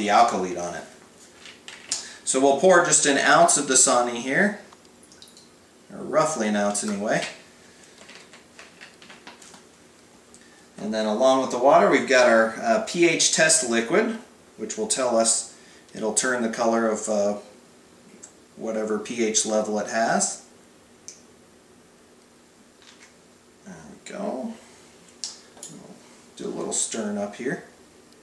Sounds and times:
Speech: 0:00.0 - 0:01.0, 0:02.3 - 0:04.7, 0:05.9 - 0:07.4, 0:10.8 - 0:17.5, 0:18.6 - 0:20.5, 0:23.6 - 0:24.7, 0:25.7 - 0:27.7
Inside, small room: 0:00.0 - 0:28.2
Water: 0:05.0 - 0:05.6.

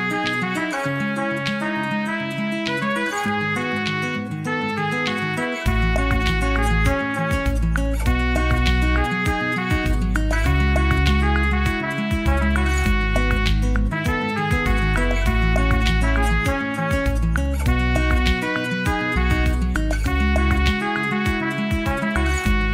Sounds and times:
Clarinet: 0:00.0 - 0:22.7.

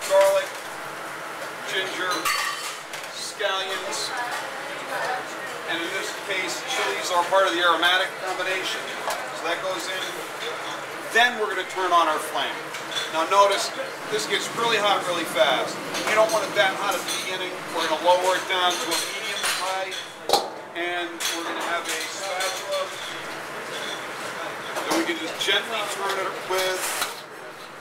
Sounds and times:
Speech: 0:11.1 - 0:20.0, 0:20.8 - 0:23.0, 0:24.8 - 0:26.9.

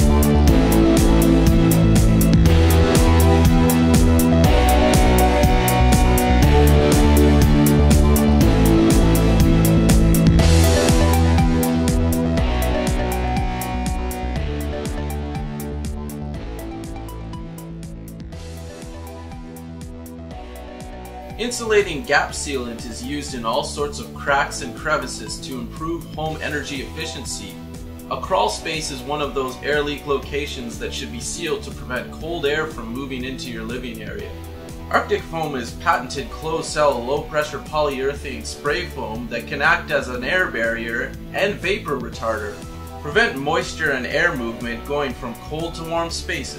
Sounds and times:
Music: 0:00.0 - 0:46.5
Speech: 0:21.4 - 0:34.3, 0:34.9 - 0:46.5.

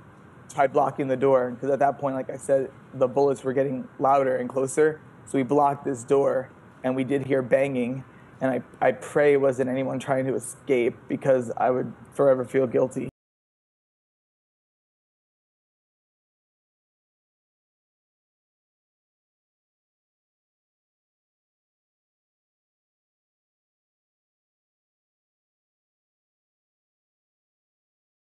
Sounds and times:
Speech: 0:00.5 - 0:13.2.

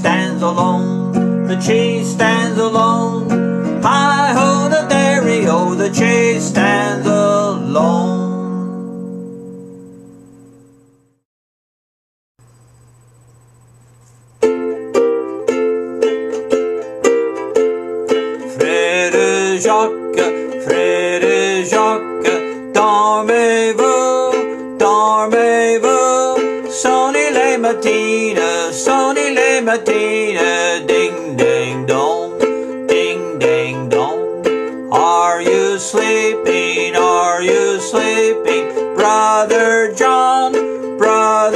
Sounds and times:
Ukulele: 0:00.0 - 0:09.9, 0:14.4 - 0:41.5
Acoustic guitar: 0:00.0 - 0:11.2, 0:13.9 - 0:41.5.

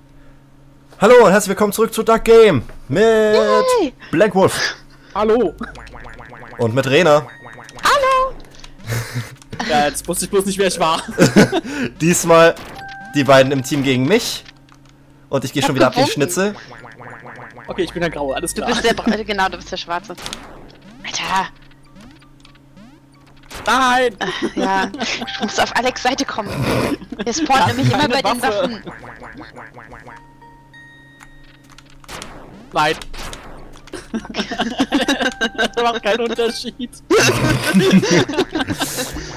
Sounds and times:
Speech: 0:01.0 - 0:05.6, 0:09.6 - 0:11.0, 0:15.4 - 0:16.7, 0:17.7 - 0:20.2, 0:23.7 - 0:28.9, 0:35.7 - 0:37.0.

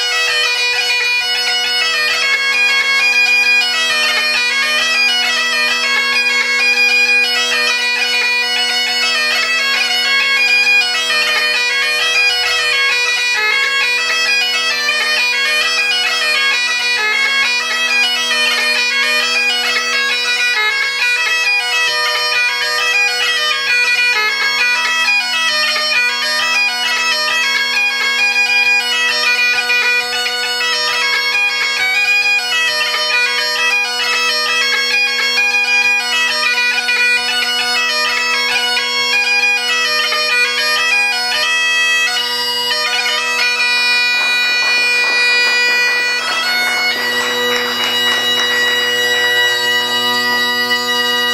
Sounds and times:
Bagpipes: 0:00.0 - 0:51.3.

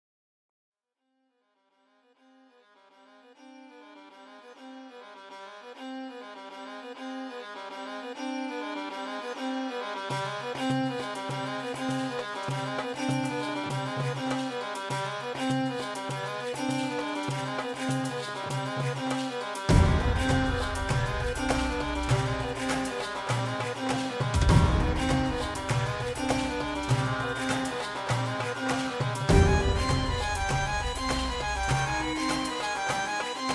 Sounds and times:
Music: 0:01.4 - 0:33.5.

